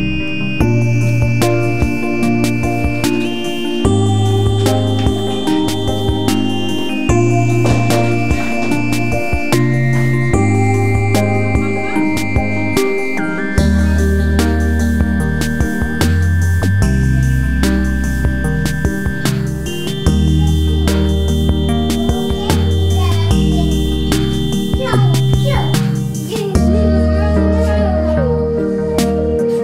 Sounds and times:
Music: 0.0s - 29.6s.

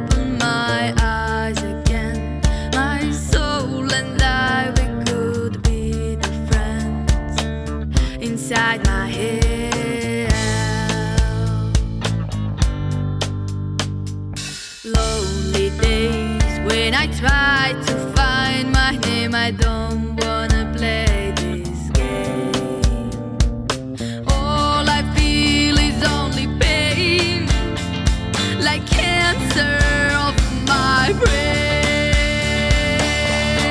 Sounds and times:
Music: 0.0s - 33.7s.

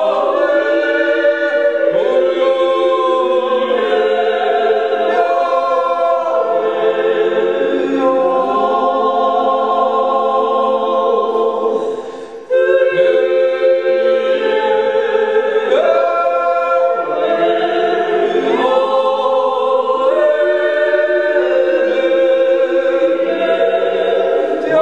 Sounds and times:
A capella: 0.0s - 24.8s
Chant: 0.0s - 24.8s
Choir: 0.0s - 24.8s.

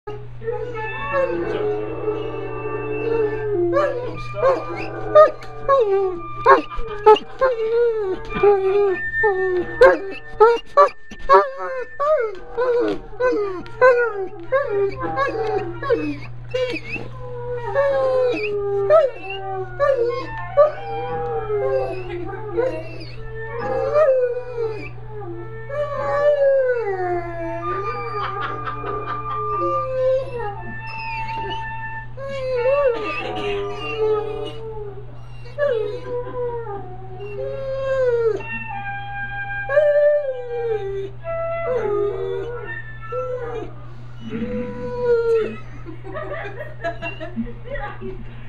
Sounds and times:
Music: 0.1s - 45.4s
Howl: 0.1s - 47.3s.

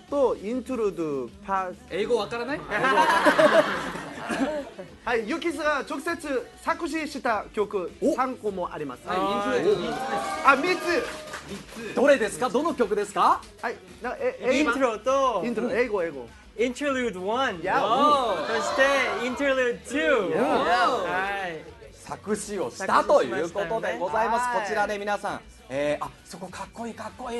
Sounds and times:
Music: 0.0s - 27.3s
Speech: 12.0s - 27.3s.

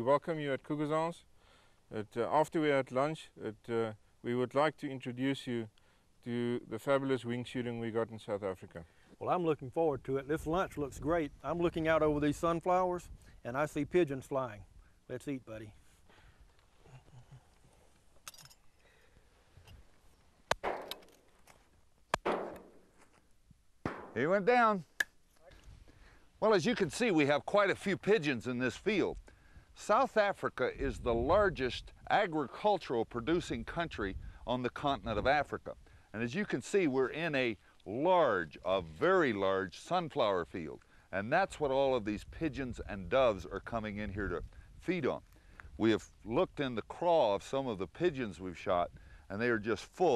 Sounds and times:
Speech: 0.0s - 1.2s, 1.9s - 15.8s, 24.2s - 25.6s, 26.4s - 29.2s, 29.8s - 45.2s, 45.8s - 50.1s.

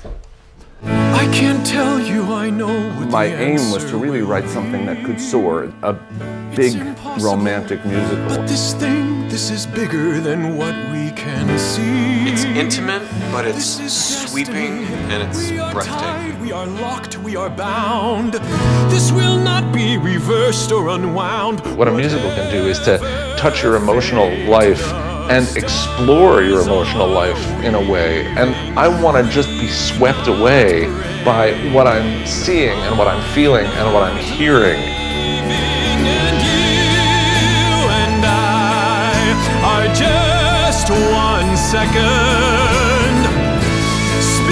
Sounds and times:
Music: 0.0s - 44.5s
Speech: 2.9s - 6.0s, 6.6s - 8.7s, 12.3s - 13.7s, 14.4s - 16.2s, 21.6s - 34.9s.

